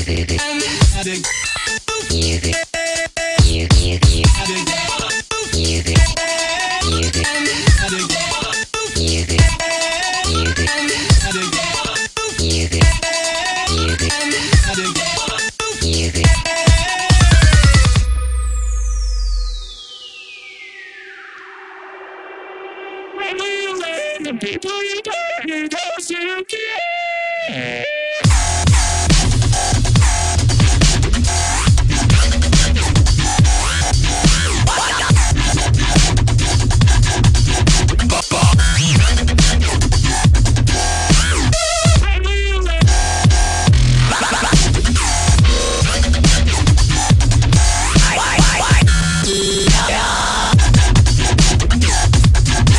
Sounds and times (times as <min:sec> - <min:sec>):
Music: 0:00.0 - 0:24.8, 0:27.4 - 0:52.7.